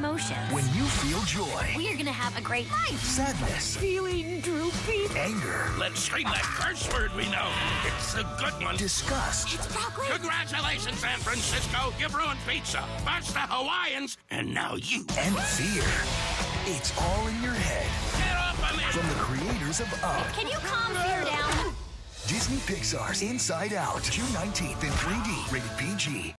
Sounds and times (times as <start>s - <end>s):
Music: 0.0s - 14.2s, 14.8s - 26.3s.